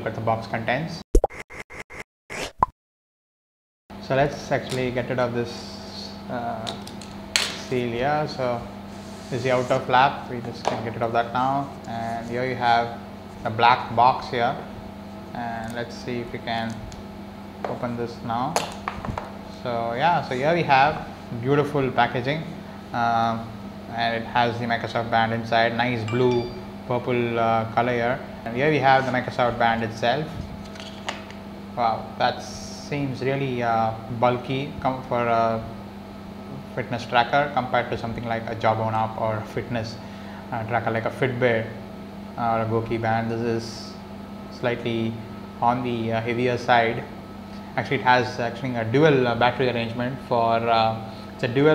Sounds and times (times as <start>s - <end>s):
Speech: 0.0s - 1.0s, 4.0s - 6.9s, 7.5s - 8.7s, 9.3s - 14.7s, 15.3s - 16.8s, 17.7s - 18.6s, 19.5s - 30.4s, 31.8s - 35.8s, 36.5s - 41.8s, 42.4s - 47.2s, 47.8s - 51.7s.